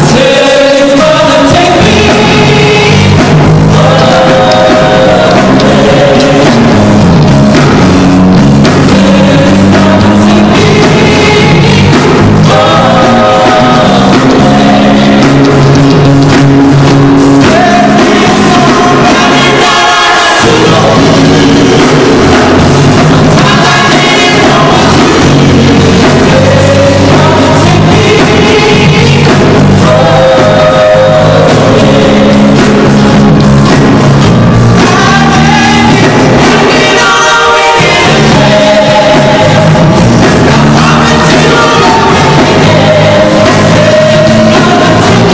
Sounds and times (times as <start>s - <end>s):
Male singing: 0.0s - 6.9s, 8.8s - 15.5s, 17.4s - 22.5s, 23.3s - 32.8s, 34.8s - 45.3s
Music: 0.0s - 45.3s.